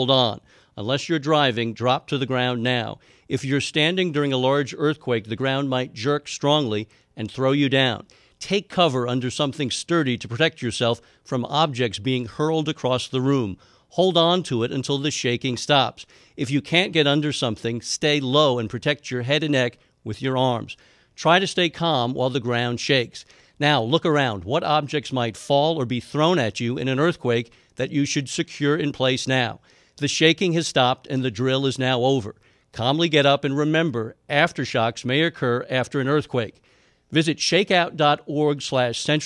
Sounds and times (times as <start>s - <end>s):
Speech: 0.0s - 39.2s.